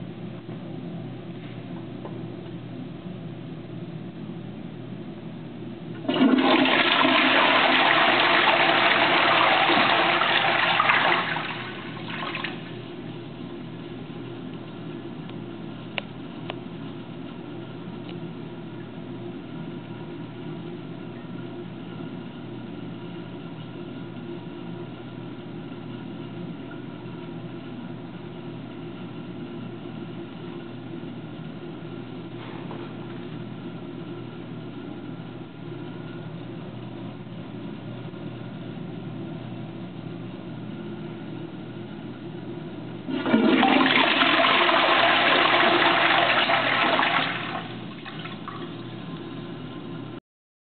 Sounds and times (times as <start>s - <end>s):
Toilet flush: 6.0s - 12.8s, 43.1s - 49.4s.